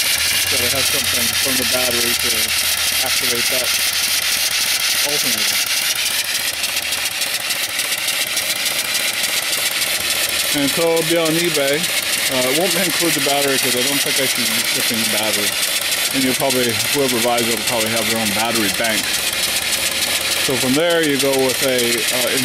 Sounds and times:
Engine: 0.0 - 22.4
Speech: 0.6 - 3.7, 5.1 - 5.6, 10.6 - 15.5, 16.2 - 19.1, 20.5 - 22.4.

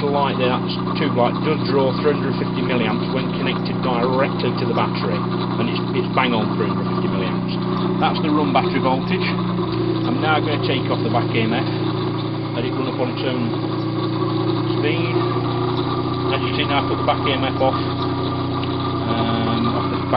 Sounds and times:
Speech: 0.0 - 9.4, 10.1 - 11.8, 12.6 - 13.6, 14.8 - 15.3, 16.3 - 17.9, 19.1 - 20.1
Engine: 0.0 - 20.1.

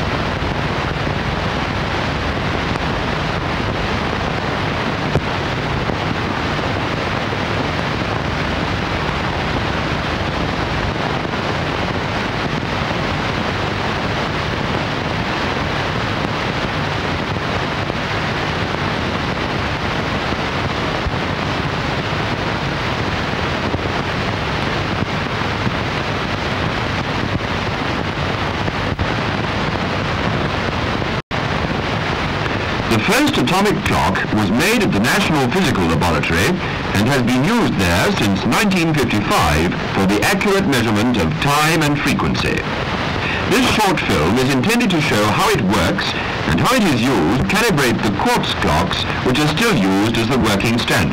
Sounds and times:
Speech: 32.9 - 51.1.

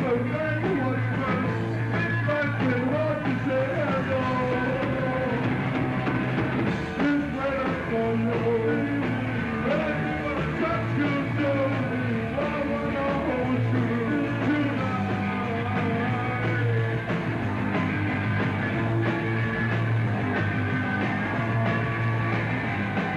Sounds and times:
Music: 0.0 - 23.1.

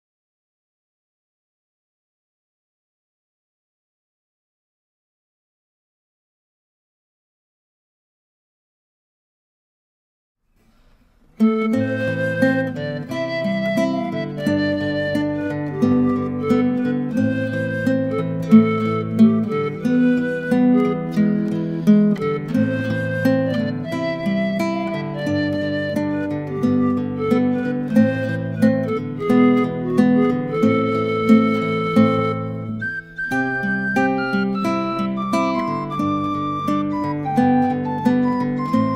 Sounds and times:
Music: 10.6 - 38.9.

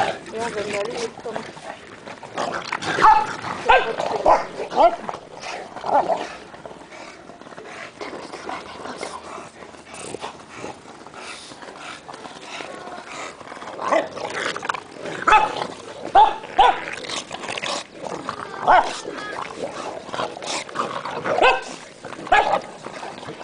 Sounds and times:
Bow-wow: 2.9 - 5.1, 15.2 - 17.0, 18.6 - 19.1, 21.3 - 22.6.

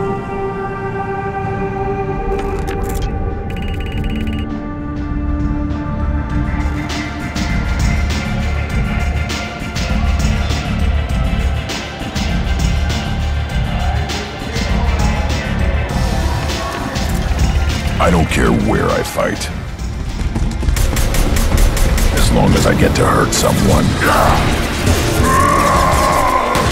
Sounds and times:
Music: 0.0 - 26.7.

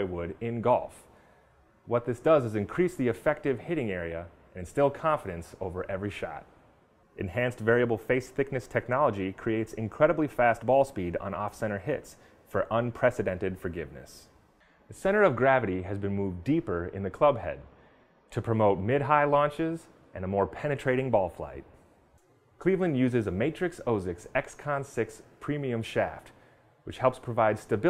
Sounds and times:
Speech: 0.0 - 1.1, 1.9 - 6.5, 7.2 - 17.7, 18.3 - 21.8, 22.6 - 27.8.

